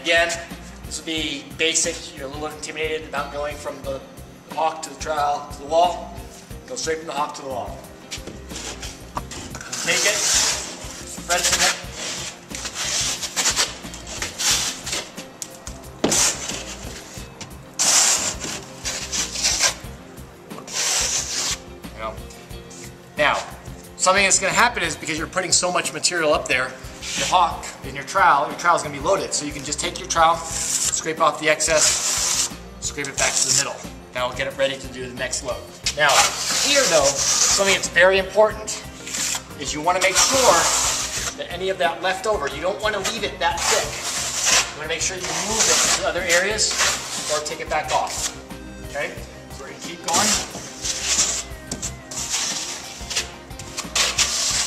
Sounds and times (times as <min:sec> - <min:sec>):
Music: 0:00.0 - 0:54.6.